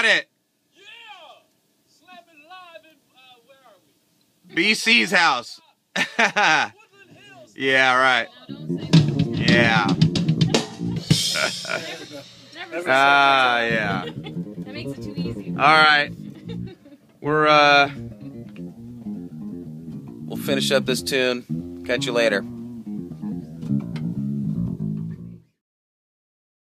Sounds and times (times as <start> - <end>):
Bass drum: 8.5 - 12.3, 12.9 - 16.8, 17.9 - 25.4
Drum kit: 8.5 - 16.7, 17.3 - 25.4.